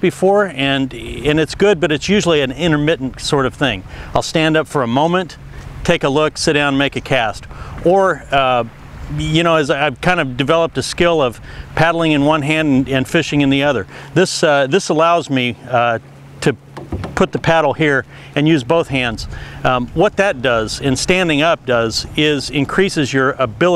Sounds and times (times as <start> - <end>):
Speech: 0.0 - 16.6, 17.2 - 23.7
Rowboat, canoe, kayak: 0.0 - 23.7.